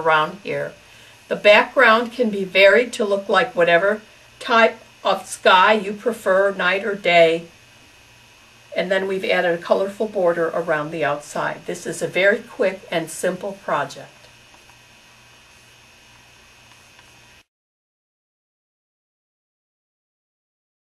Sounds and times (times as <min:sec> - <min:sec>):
Speech: 0:00.0 - 0:07.5, 0:08.8 - 0:14.3
Inside, small room: 0:00.0 - 0:17.5.